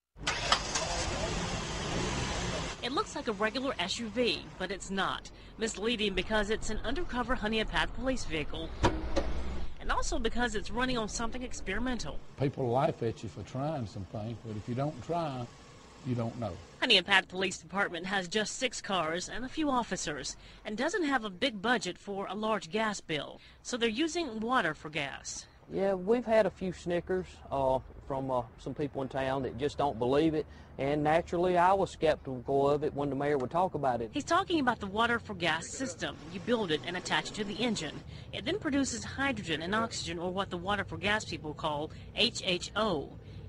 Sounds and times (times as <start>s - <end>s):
Speech: 9.8s - 15.5s.